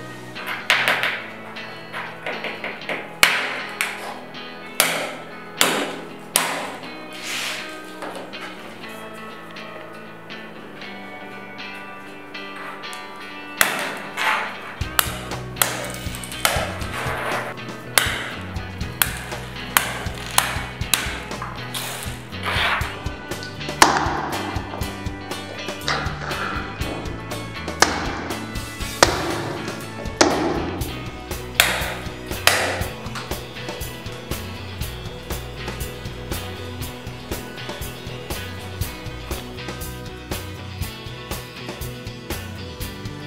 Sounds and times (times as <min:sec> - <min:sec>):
Music: 0:00.0 - 0:43.2.